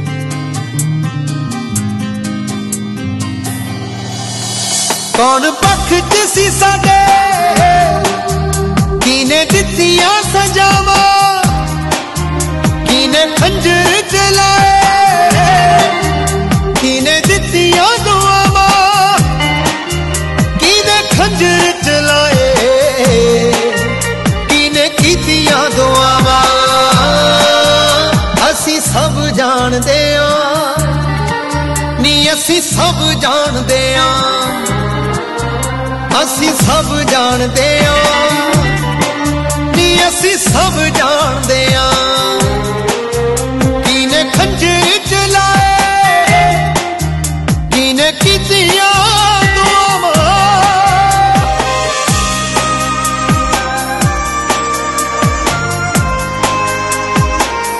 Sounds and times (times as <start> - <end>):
Music of Bollywood: 0.0 - 57.7.